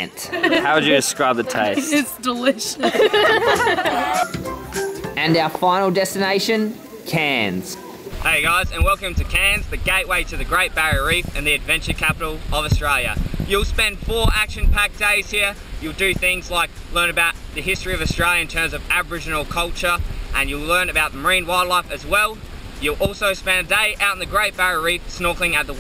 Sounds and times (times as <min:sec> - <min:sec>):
Wind noise (microphone): 0:08.2 - 0:15.1, 0:15.7 - 0:16.7, 0:17.7 - 0:18.4, 0:22.4 - 0:23.2.